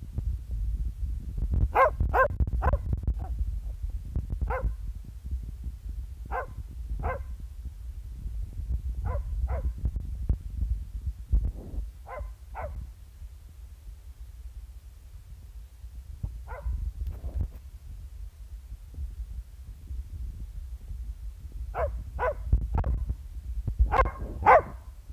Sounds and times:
Bark: 1.7s - 3.3s, 4.5s - 4.8s, 6.3s - 7.3s, 9.0s - 9.8s, 12.0s - 12.8s, 16.5s - 16.8s, 21.8s - 22.5s, 23.9s - 24.8s
Canidae, dogs, wolves: 1.8s - 3.3s, 4.5s - 4.8s, 6.3s - 7.3s, 9.0s - 9.8s, 12.0s - 12.8s, 16.5s - 16.8s, 21.8s - 22.5s, 23.9s - 24.8s.

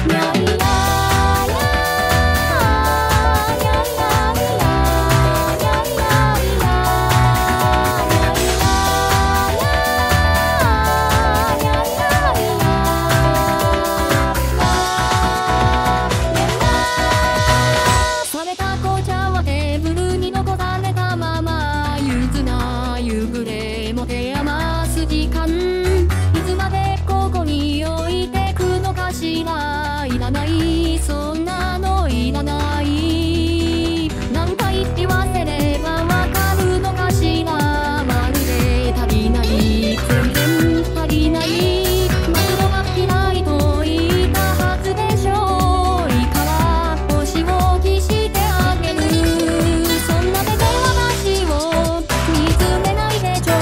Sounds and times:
Music: 0.0s - 53.6s.

